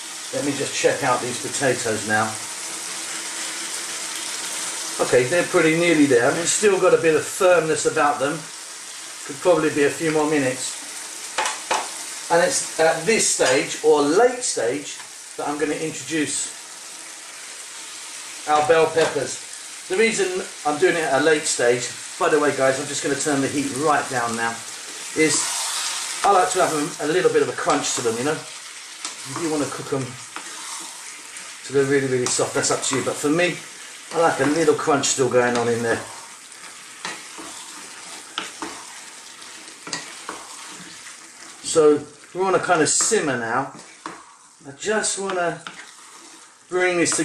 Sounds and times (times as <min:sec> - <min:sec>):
Frying (food): 0:00.0 - 0:47.2
Stir: 0:29.0 - 0:44.5, 0:45.2 - 0:47.2.